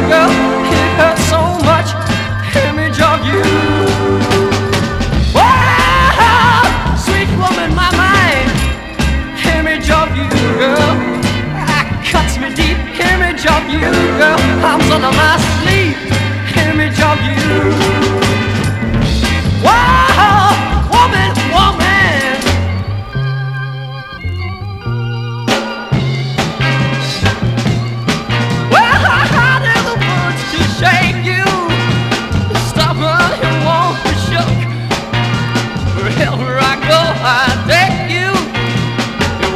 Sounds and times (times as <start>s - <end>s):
Psychedelic rock: 0.0s - 39.5s
Soul music: 0.0s - 39.5s.